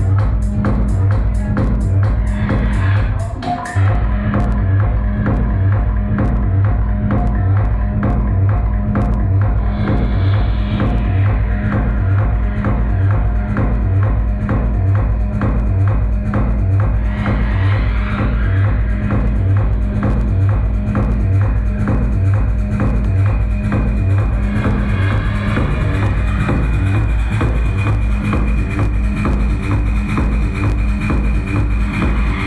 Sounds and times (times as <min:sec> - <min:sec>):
Techno: 0:00.0 - 0:32.4.